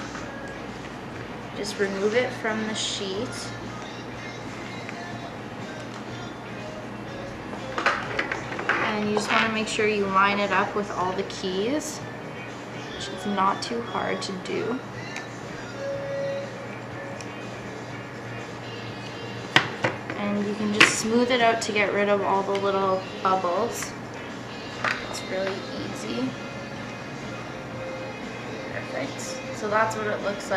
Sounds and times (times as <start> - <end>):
Guitar: 0.0 - 30.5
Speech: 1.6 - 3.5, 8.8 - 12.0, 20.2 - 23.9, 28.7 - 30.5.